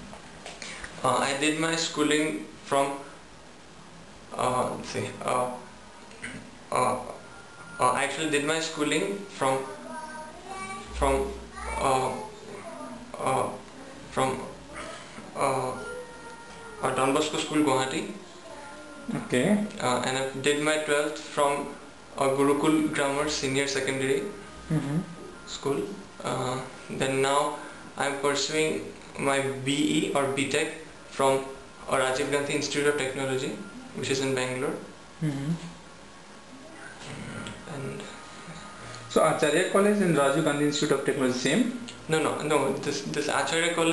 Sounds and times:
Male speech, man speaking: 1.0 - 3.2, 4.3 - 5.7, 6.3 - 7.2, 7.8 - 9.9, 10.9 - 12.4, 13.1 - 14.6, 15.4 - 16.0, 16.8 - 18.2, 19.1 - 24.4, 25.5 - 34.9, 37.0 - 38.2, 39.1 - 43.9.

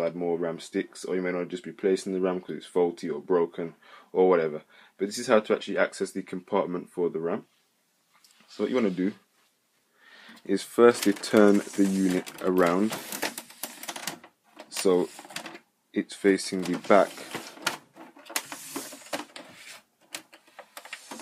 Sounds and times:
Speech: 0.0 - 7.5, 8.5 - 9.3, 10.4 - 13.0, 14.7 - 15.2, 15.9 - 17.3
Inside, small room: 0.0 - 21.2.

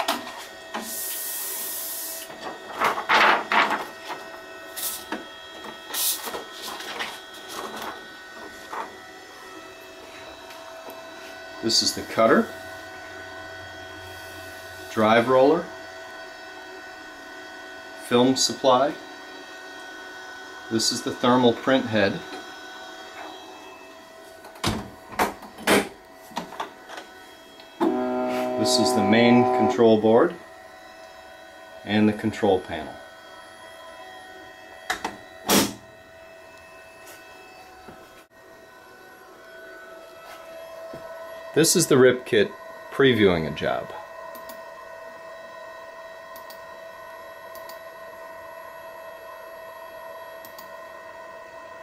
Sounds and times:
Printer: 0.0 - 51.8
Speech: 11.6 - 12.5, 14.9 - 15.7, 18.0 - 19.0, 20.7 - 22.3, 28.6 - 30.4, 31.8 - 33.0, 41.6 - 44.0.

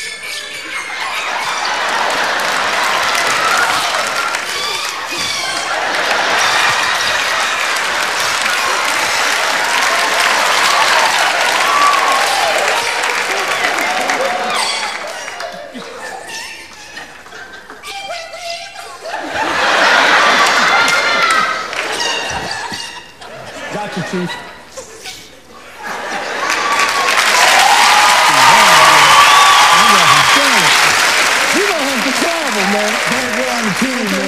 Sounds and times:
Laughter: 0.0 - 3.4, 5.1 - 10.6, 13.3 - 27.2.

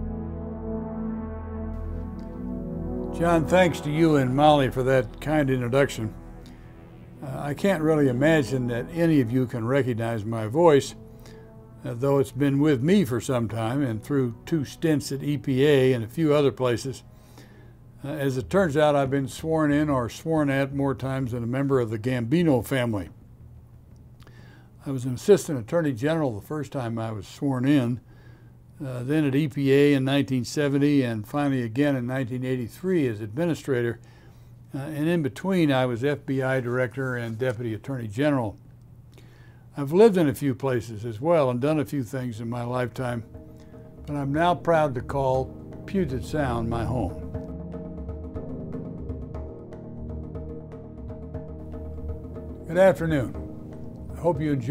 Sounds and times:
Speech: 3.2 - 6.1, 7.2 - 11.0, 11.8 - 17.0, 18.0 - 23.2, 24.8 - 28.0, 28.8 - 34.0, 34.7 - 38.6, 39.8 - 43.3, 44.1 - 47.2, 52.7 - 53.4, 54.2 - 54.7.

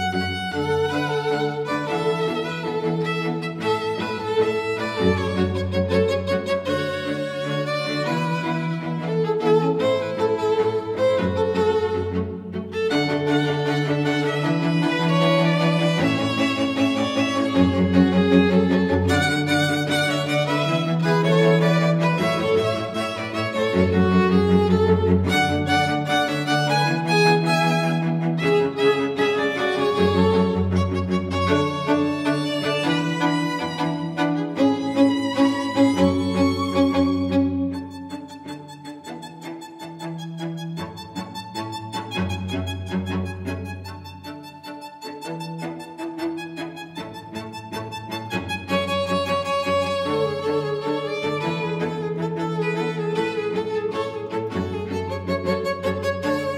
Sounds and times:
Cello: 0.0 - 56.5.

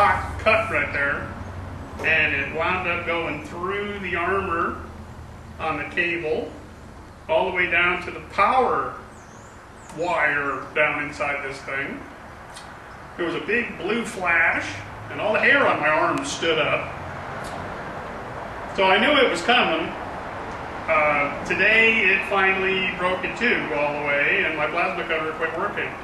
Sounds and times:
Speech: 0.0 - 1.3, 2.0 - 4.9, 5.6 - 6.6, 7.3 - 9.0, 9.9 - 12.1, 13.2 - 16.9, 18.8 - 20.0, 20.9 - 26.0.

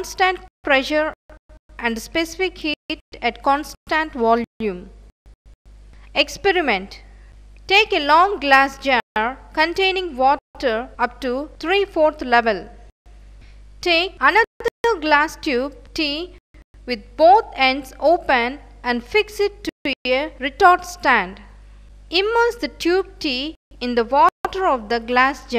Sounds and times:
Speech: 0.0 - 1.2, 1.8 - 4.9, 6.2 - 7.1, 7.7 - 12.8, 13.8 - 21.5, 22.1 - 25.5.

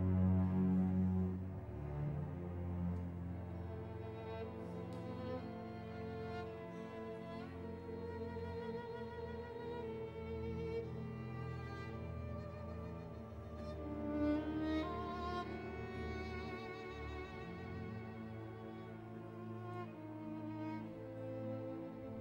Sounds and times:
Violin, fiddle: 0.0 - 22.2.

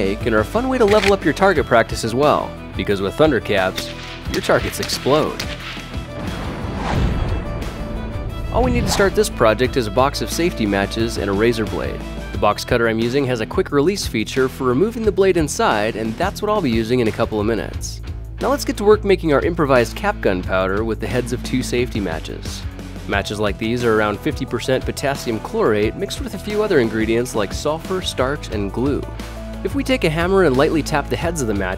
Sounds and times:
Speech: 0.0 - 5.4, 8.5 - 31.7
Music: 0.0 - 31.7.

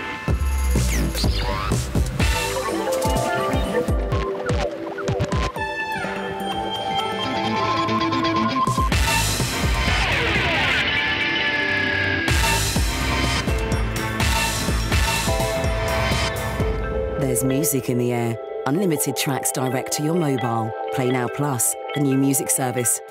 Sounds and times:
Music: 0.0 - 23.1
Speech: 17.2 - 23.1.

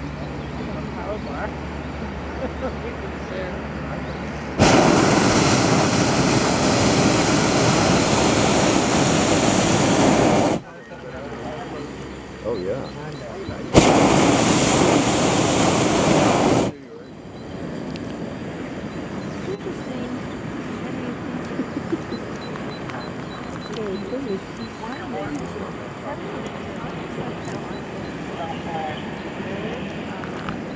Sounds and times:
Speech: 0.0 - 4.2, 10.5 - 13.8, 16.1 - 17.2, 19.3 - 30.7.

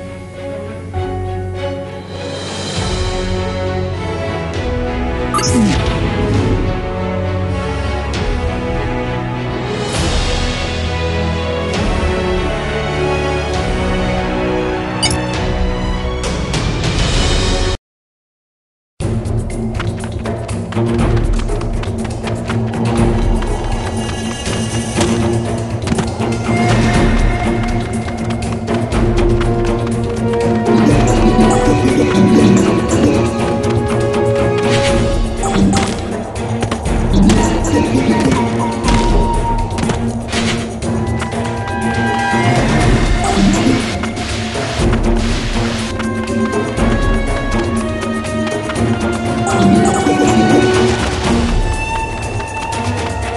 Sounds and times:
Music: 0.0 - 17.8, 19.0 - 53.3.

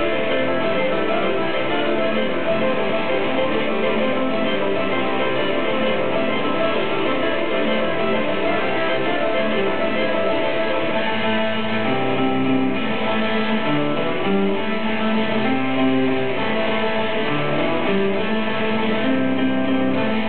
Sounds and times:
Guitar: 0.0 - 20.2.

